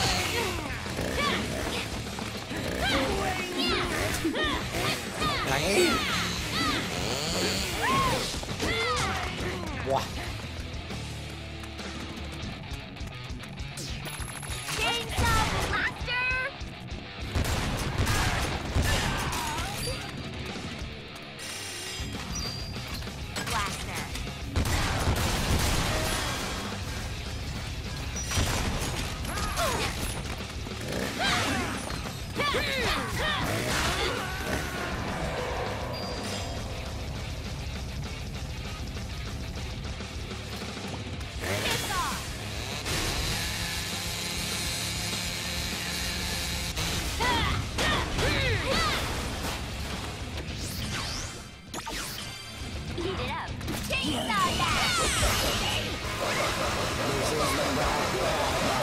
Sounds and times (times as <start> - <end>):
Music: 0.0 - 58.8.